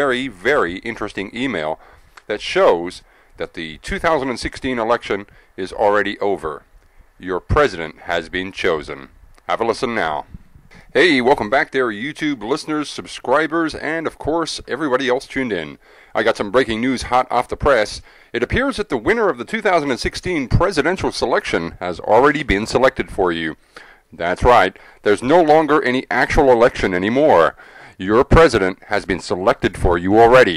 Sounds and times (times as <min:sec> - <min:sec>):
Speech: 0:00.0 - 0:06.6, 0:07.2 - 0:10.3, 0:10.9 - 0:30.5.